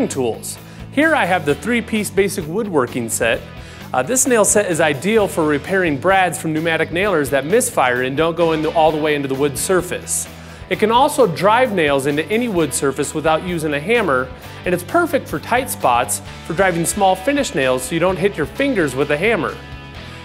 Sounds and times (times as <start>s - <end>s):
Speech: 0.0s - 19.6s
Music: 0.0s - 20.2s.